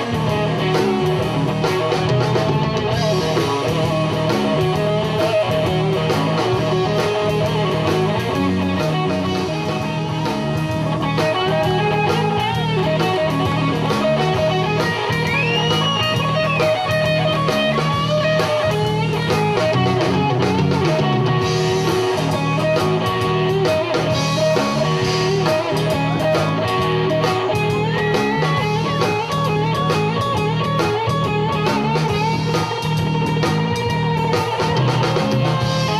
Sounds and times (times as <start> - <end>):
Blues: 0.0 - 35.9.